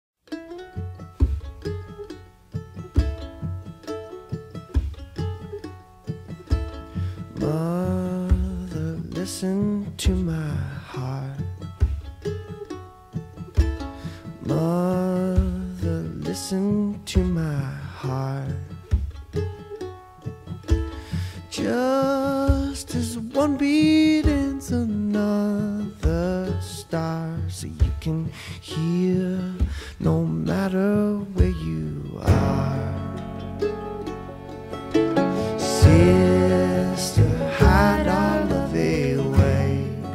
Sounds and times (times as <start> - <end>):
Mandolin: 0.2 - 40.1.